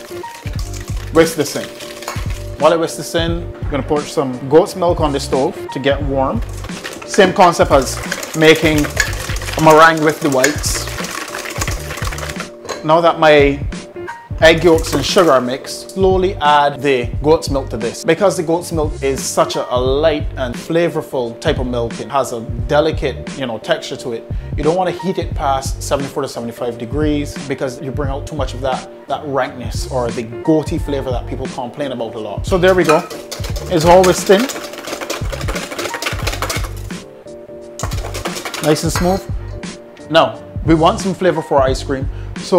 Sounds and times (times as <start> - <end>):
Stir: 0.0 - 2.9, 6.4 - 12.6, 14.6 - 15.6, 32.5 - 37.0, 37.8 - 39.3.